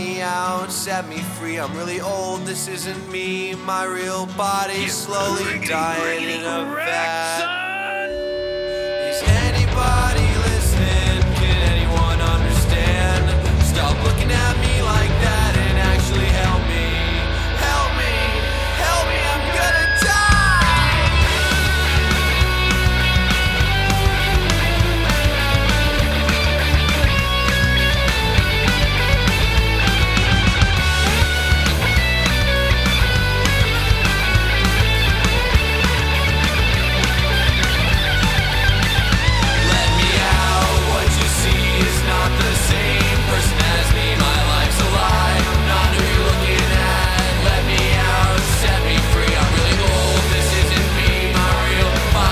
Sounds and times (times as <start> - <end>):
Music: 0.0 - 52.3.